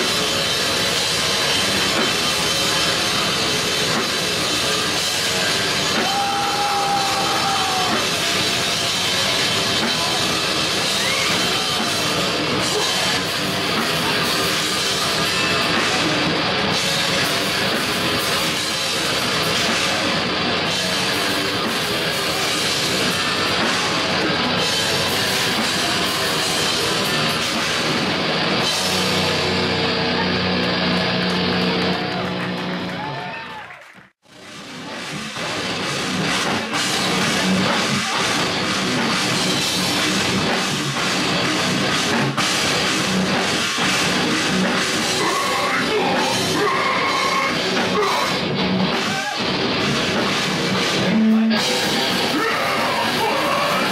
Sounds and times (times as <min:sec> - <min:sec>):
Heavy metal: 0:00.0 - 0:33.6, 0:34.2 - 0:53.9.